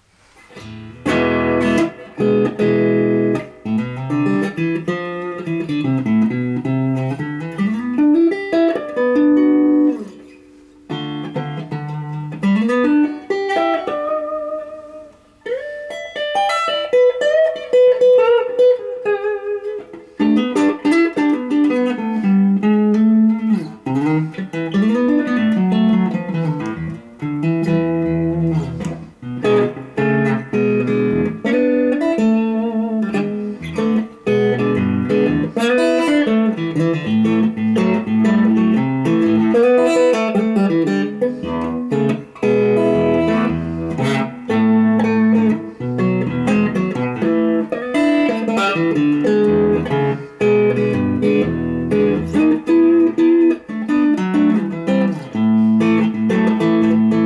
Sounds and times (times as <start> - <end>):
Electric guitar: 0.0 - 57.2.